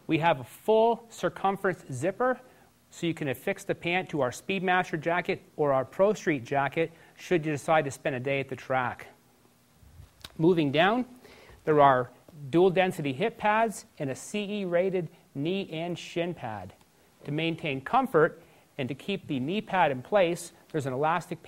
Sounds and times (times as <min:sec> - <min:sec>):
Speech: 0:00.1 - 0:09.2, 0:10.4 - 0:21.4.